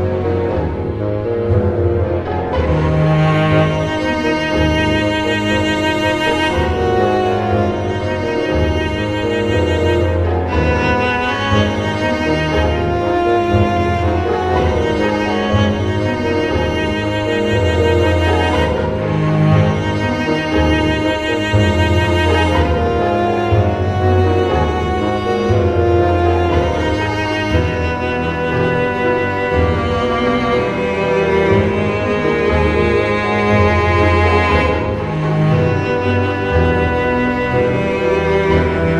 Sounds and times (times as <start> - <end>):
Theme music: 0.0 - 38.9.